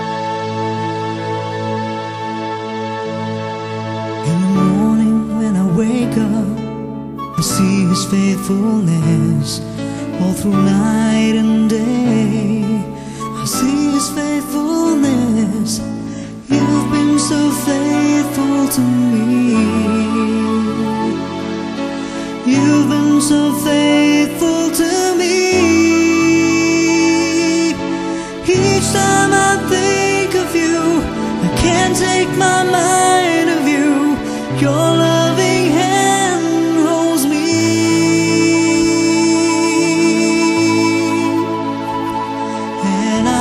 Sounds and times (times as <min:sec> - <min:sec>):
Tender music: 0:00.0 - 0:43.4.